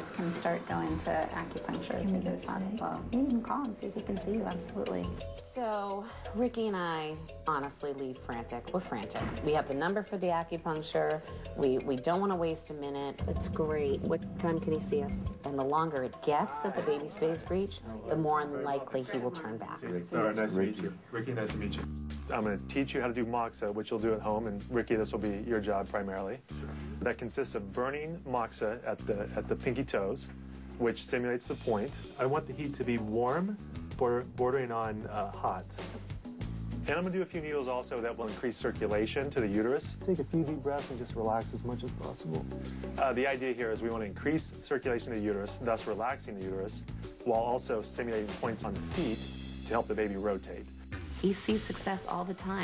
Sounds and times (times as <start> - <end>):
Music: 0.0 - 52.6.